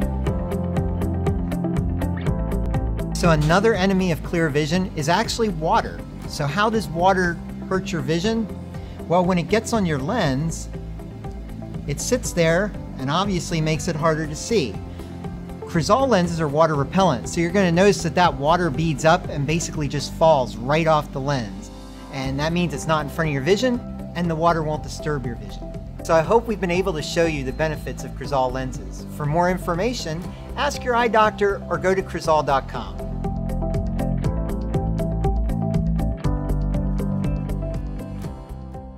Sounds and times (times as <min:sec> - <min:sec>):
Music: 0:00.0 - 0:38.9
Speech: 0:03.2 - 0:08.5, 0:09.1 - 0:10.7, 0:11.9 - 0:14.8, 0:15.7 - 0:33.0.